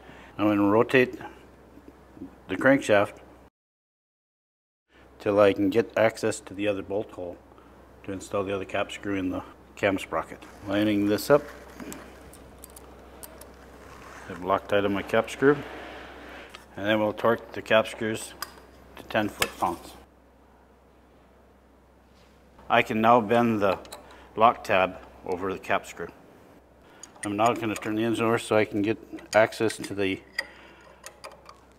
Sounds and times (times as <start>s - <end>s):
Speech: 0.4s - 1.4s, 2.5s - 3.2s, 5.2s - 7.4s, 8.0s - 11.5s, 14.3s - 15.6s, 16.8s - 18.4s, 19.0s - 20.1s, 22.7s - 23.8s, 24.4s - 26.2s, 27.2s - 30.2s.